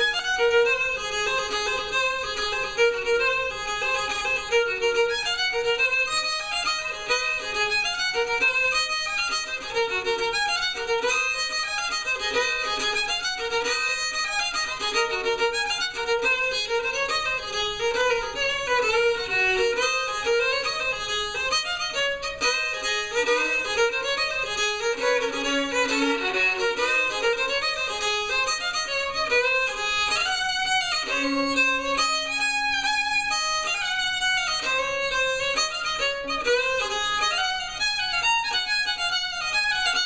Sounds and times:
Violin, fiddle: 0.0 - 40.0.

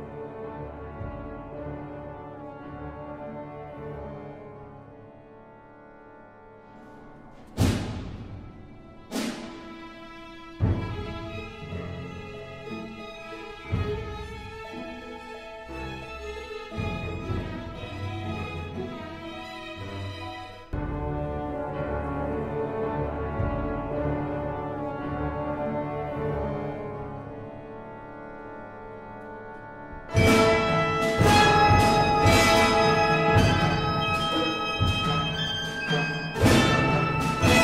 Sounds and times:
Sad music: 0.0 - 37.6.

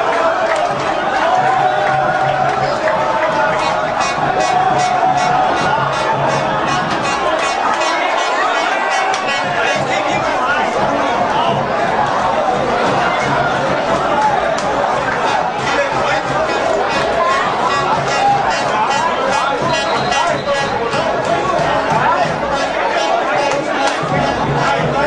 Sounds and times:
Speech: 0.0 - 25.0.

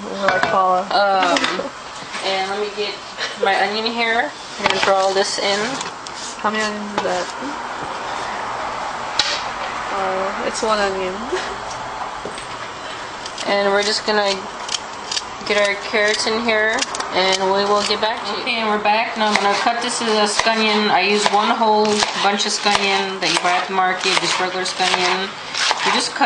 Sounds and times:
Speech: 0.0 - 7.6, 9.9 - 11.4, 15.5 - 26.2.

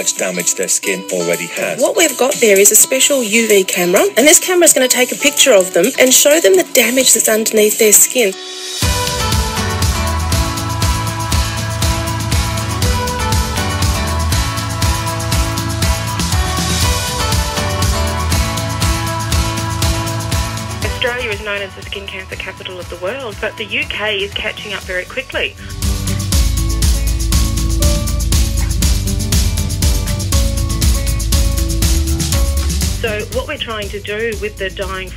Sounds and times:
Speech: 0.0 - 8.4, 20.8 - 25.7, 33.0 - 35.1
Music: 0.0 - 35.1.

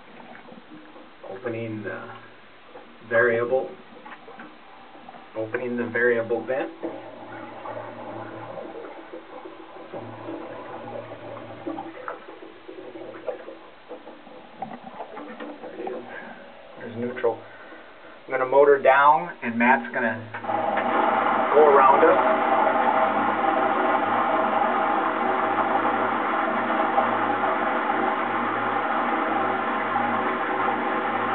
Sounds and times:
Speech: 1.3 - 2.2, 3.1 - 3.8, 5.4 - 6.7, 16.8 - 17.4, 18.3 - 20.3, 21.5 - 22.3.

